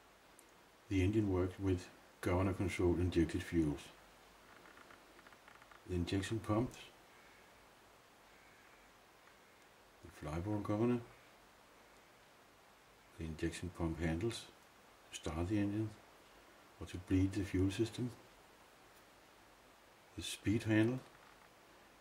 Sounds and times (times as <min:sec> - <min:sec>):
Speech: 0:00.9 - 0:04.0, 0:05.9 - 0:07.0, 0:10.0 - 0:11.2, 0:13.2 - 0:16.0, 0:16.8 - 0:18.2, 0:20.1 - 0:21.1.